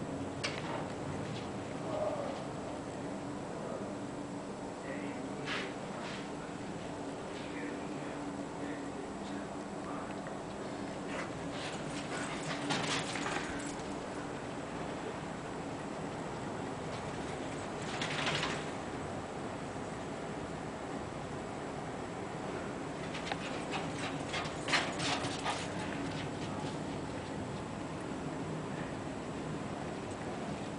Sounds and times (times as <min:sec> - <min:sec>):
Speech: 0:01.8 - 0:02.4, 0:03.5 - 0:04.1, 0:04.8 - 0:05.8, 0:07.3 - 0:10.3.